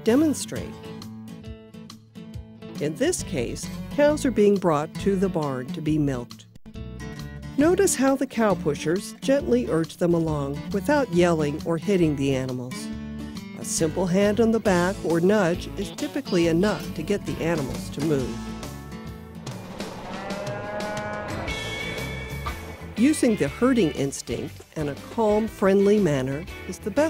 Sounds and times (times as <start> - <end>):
Speech: 0.0 - 0.8, 2.8 - 6.4, 7.6 - 12.9, 13.6 - 18.4, 23.0 - 27.0
Music: 0.0 - 27.0.